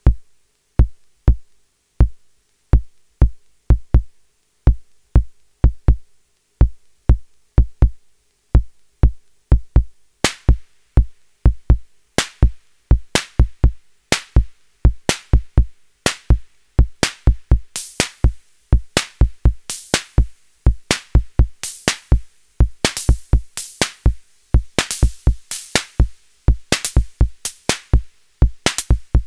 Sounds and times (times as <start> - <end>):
Drum machine: 0.0 - 8.0, 8.6 - 29.2.